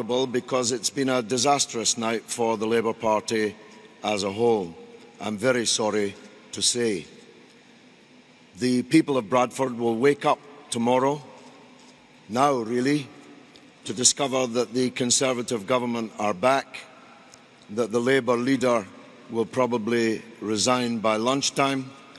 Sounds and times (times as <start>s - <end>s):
Male speech, man speaking: 0.0s - 7.1s, 8.6s - 11.3s, 12.3s - 13.1s, 13.8s - 16.9s, 17.7s - 22.0s
Narration, monologue: 0.0s - 22.1s.